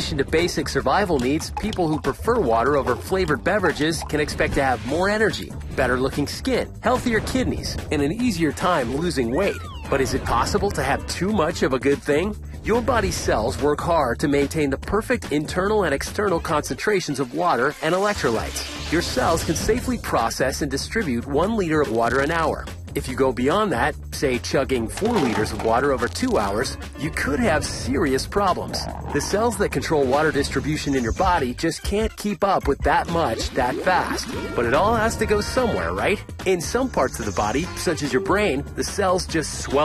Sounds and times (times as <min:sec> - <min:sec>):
Music: 0:00.0 - 0:39.8
Speech: 0:00.0 - 0:39.8.